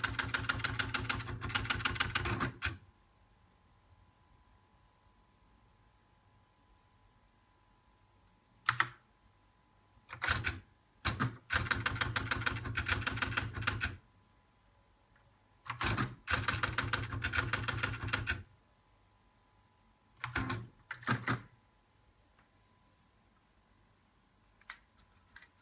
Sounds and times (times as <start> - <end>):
Typewriter: 0.0 - 2.8, 10.1 - 14.0, 15.6 - 18.5, 20.2 - 21.5, 24.6 - 25.6.